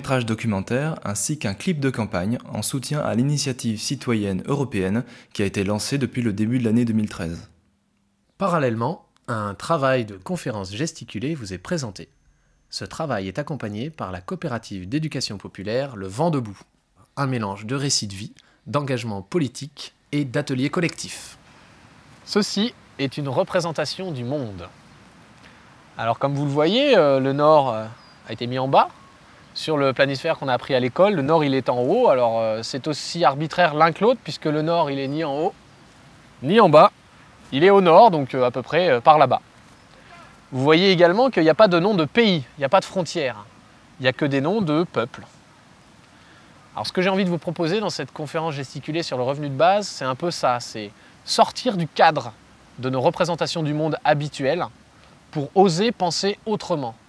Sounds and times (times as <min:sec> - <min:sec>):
Speech: 0:00.0 - 0:07.6, 0:08.4 - 0:12.1, 0:12.7 - 0:21.4, 0:22.2 - 0:24.7, 0:26.0 - 0:28.9, 0:29.6 - 0:35.6, 0:36.4 - 0:39.4, 0:40.0 - 0:45.3, 0:46.8 - 0:54.7, 0:55.3 - 0:57.0.